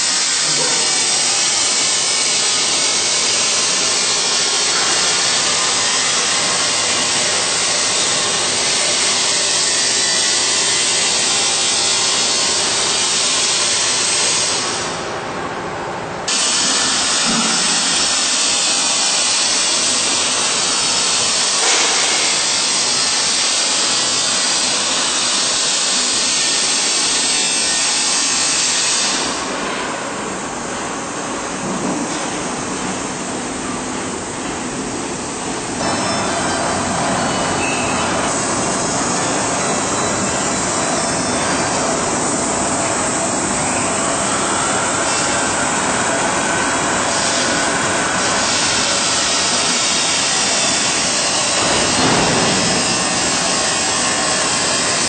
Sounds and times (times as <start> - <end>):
Jet engine: 16.3 - 30.0, 35.8 - 55.0.